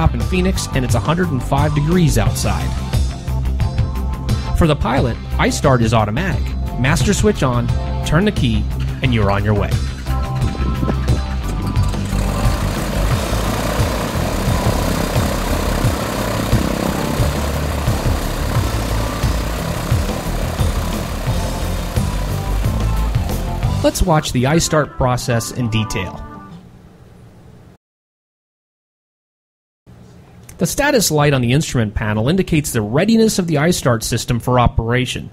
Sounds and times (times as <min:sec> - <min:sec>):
Music: 0:00.0 - 0:26.7
Aircraft engine: 0:02.5 - 0:03.4, 0:09.7 - 0:23.8
Helicopter: 0:09.9 - 0:23.9
Engine: 0:09.9 - 0:24.0.